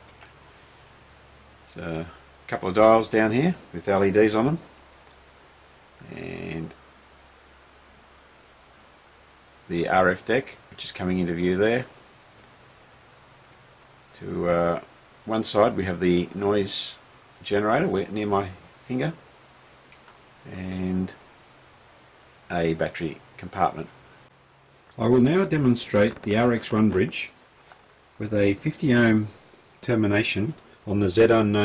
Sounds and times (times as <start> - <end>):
Speech: 1.7 - 4.7, 6.0 - 6.8, 9.7 - 12.0, 14.2 - 19.2, 20.4 - 21.2, 22.5 - 23.9, 25.0 - 27.4, 28.2 - 31.6.